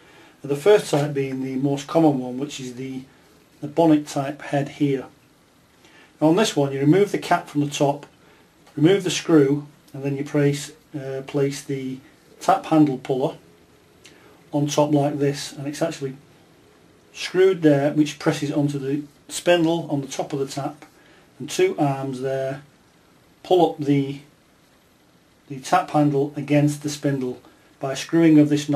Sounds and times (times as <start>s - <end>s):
Speech: 0.4s - 5.2s, 6.2s - 8.1s, 8.7s - 13.4s, 14.5s - 16.2s, 17.1s - 22.7s, 23.4s - 24.3s, 25.5s - 28.7s.